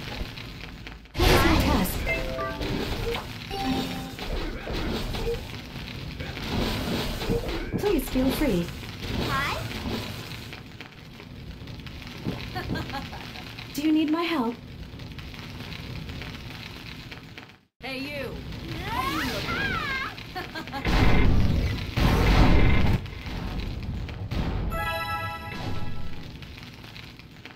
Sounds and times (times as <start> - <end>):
Speech: 13.8 - 14.6, 17.8 - 20.2.